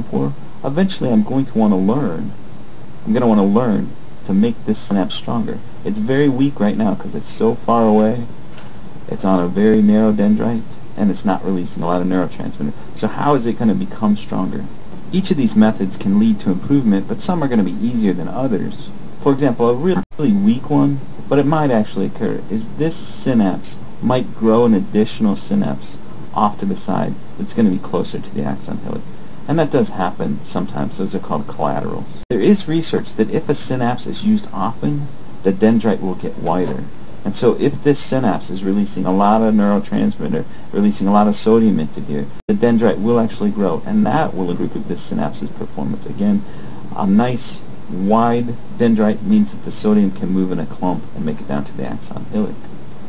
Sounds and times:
Speech: 0.0 - 2.4, 3.0 - 8.3, 9.1 - 52.7.

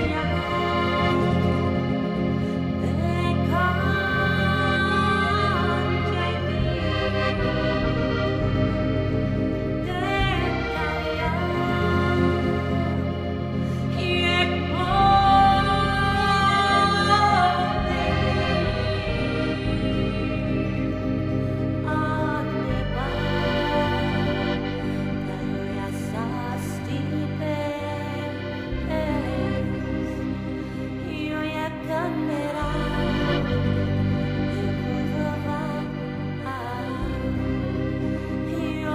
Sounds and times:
Background music: 0.0 - 38.9
Middle Eastern music: 0.0 - 38.9
Soundtrack music: 0.0 - 38.9.

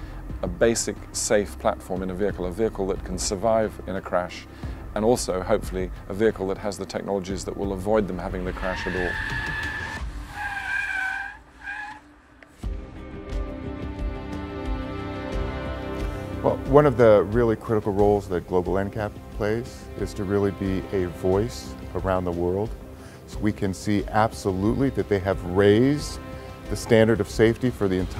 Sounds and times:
Music: 0.0 - 28.1
Speech: 0.4 - 9.2, 16.4 - 28.1.

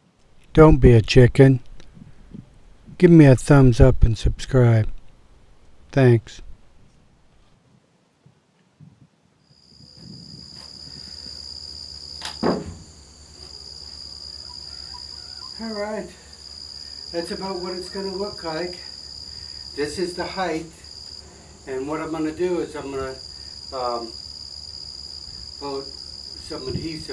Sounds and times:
Speech: 0.5 - 1.6, 3.0 - 4.9, 6.0 - 6.4, 15.6 - 16.2, 17.1 - 18.9, 19.8 - 20.8, 21.7 - 23.2, 23.8 - 24.1, 25.6 - 27.1.

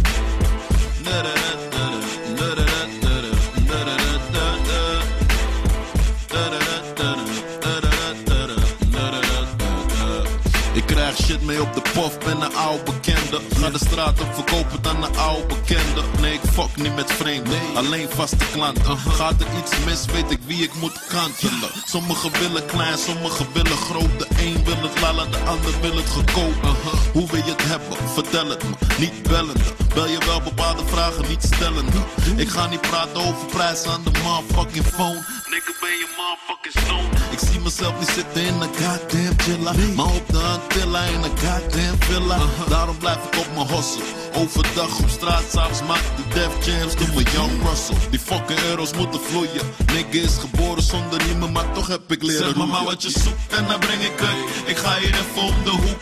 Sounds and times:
Pop music: 0.0 - 56.0.

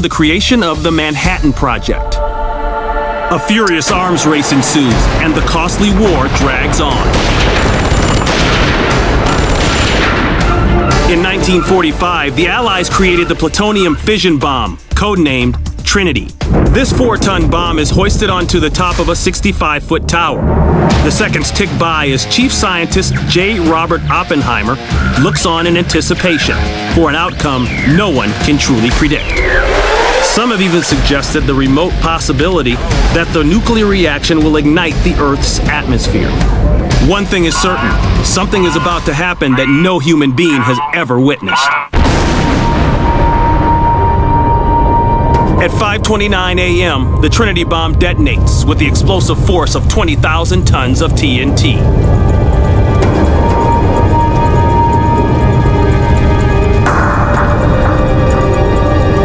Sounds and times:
Speech: 0.0 - 2.2, 3.3 - 7.1, 11.0 - 20.4, 21.0 - 29.3, 30.3 - 42.0, 45.6 - 51.9
Music: 0.0 - 59.2
Fusillade: 6.3 - 10.5.

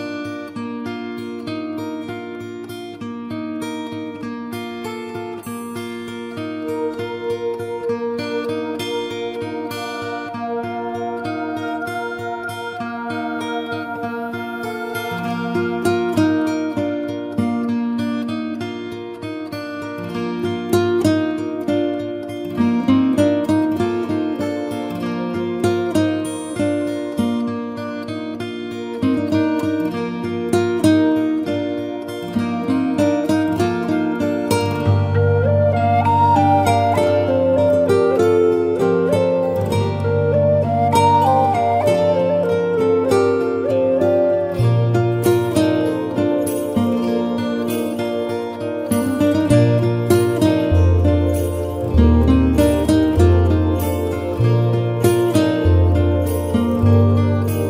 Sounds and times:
Music: 0.0 - 57.7.

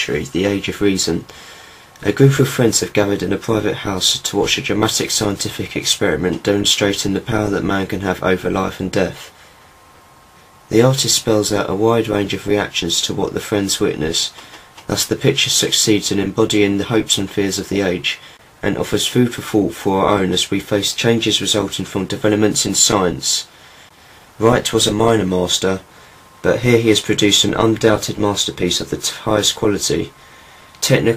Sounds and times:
Speech: 0.0 - 1.4, 2.0 - 9.4, 10.7 - 23.5, 24.4 - 30.2, 30.8 - 31.1.

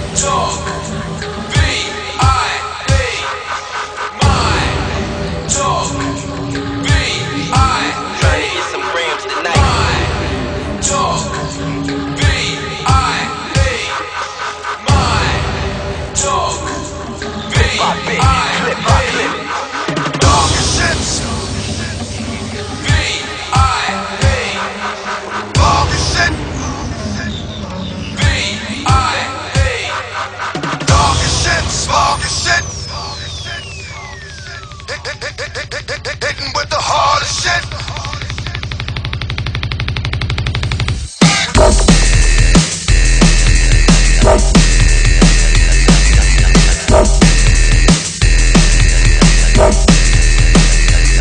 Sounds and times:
Music: 0.0 - 51.2.

